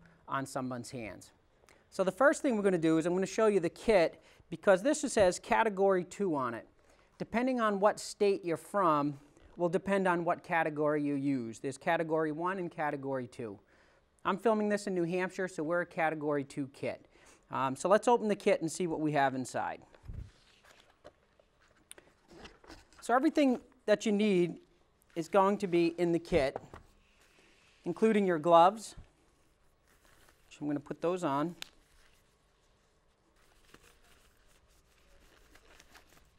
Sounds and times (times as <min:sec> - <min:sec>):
Speech: 0:00.3 - 0:13.6, 0:14.2 - 0:19.9, 0:23.0 - 0:24.6, 0:25.2 - 0:26.6, 0:27.8 - 0:29.1, 0:30.5 - 0:31.6.